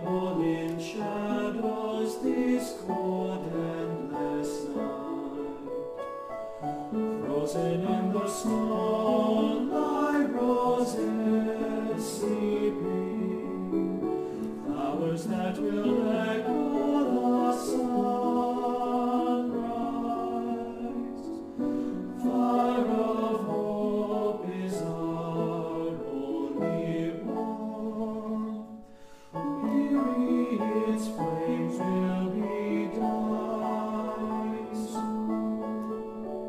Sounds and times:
Music: 0.0 - 36.4.

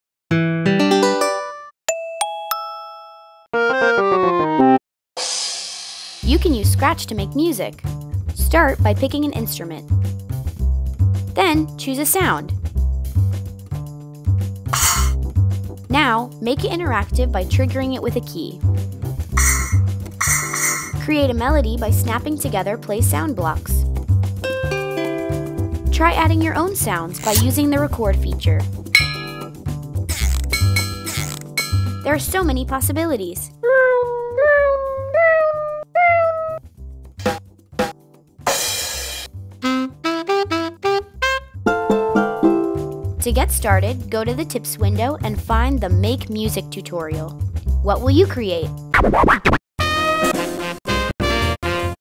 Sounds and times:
Music: 0.3 - 2.7, 3.3 - 52.0
Speech: 6.2 - 7.8, 8.4 - 9.8, 11.4 - 12.6, 15.9 - 18.6, 21.0 - 23.8, 25.9 - 28.7, 32.0 - 34.3, 43.2 - 48.8.

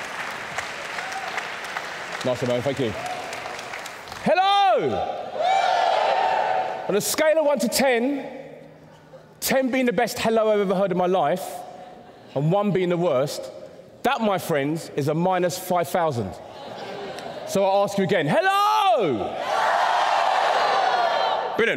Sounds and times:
Inside, large room or hall: 0.0 - 21.7
Speech: 12.4 - 16.4.

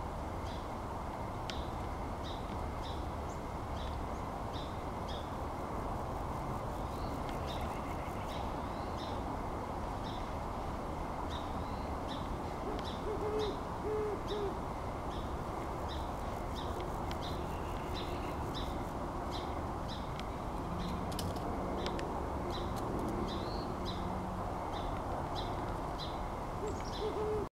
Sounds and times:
Owl: 12.7 - 14.6, 26.6 - 27.5.

